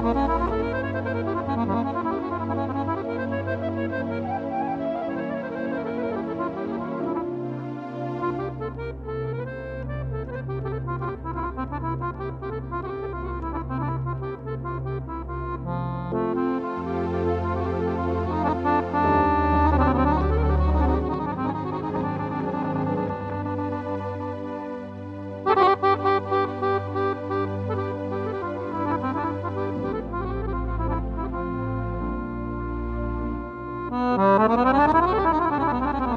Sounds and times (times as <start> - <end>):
Accordion: 0.0 - 36.1.